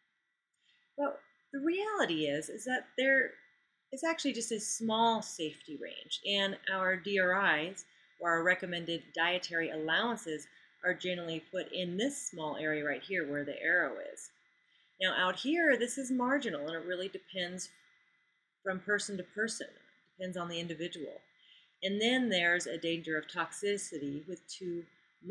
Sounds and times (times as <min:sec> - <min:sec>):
Speech: 0:01.0 - 0:03.4, 0:04.0 - 0:14.3, 0:15.0 - 0:17.7, 0:18.7 - 0:21.2, 0:21.8 - 0:25.3.